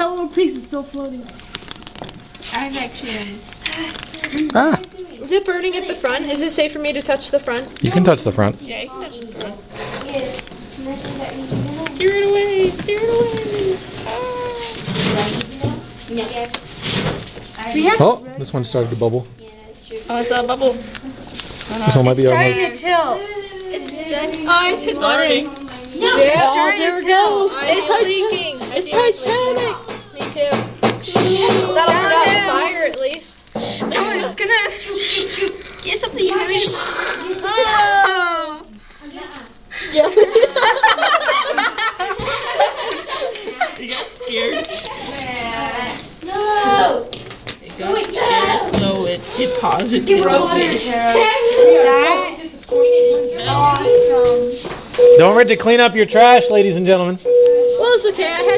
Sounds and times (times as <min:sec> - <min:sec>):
Child speech, kid speaking: 0:00.0 - 0:01.4, 0:02.5 - 0:03.4, 0:04.1 - 0:16.6, 0:17.6 - 0:18.5, 0:19.4 - 0:21.1, 0:21.7 - 0:40.4, 0:43.2 - 0:54.6, 0:57.7 - 0:58.5.